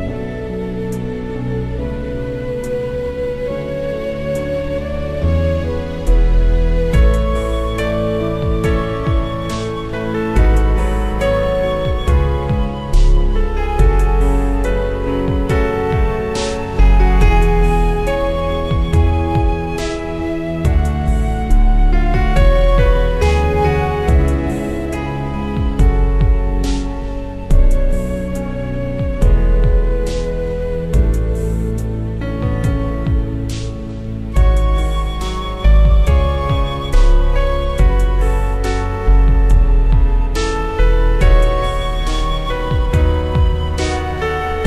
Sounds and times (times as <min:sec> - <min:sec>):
Background music: 0:00.0 - 0:44.6
New-age music: 0:00.0 - 0:44.6.